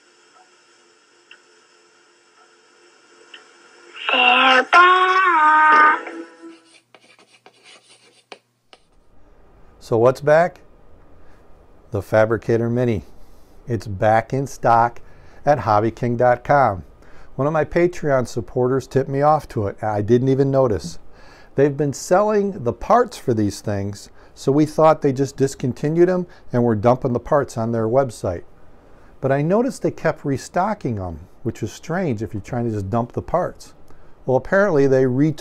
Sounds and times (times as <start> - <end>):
Inside, small room: 0.0 - 35.4
Speech: 4.0 - 6.3, 9.8 - 10.7, 11.9 - 13.1, 13.7 - 21.0, 21.6 - 28.5, 29.2 - 35.4
Writing: 6.5 - 8.9.